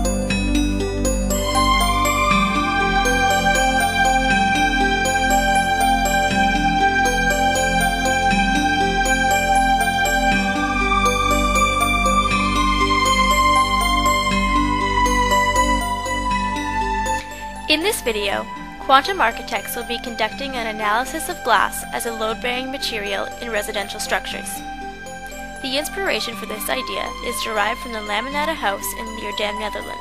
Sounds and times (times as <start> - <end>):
Background music: 0.0 - 30.0.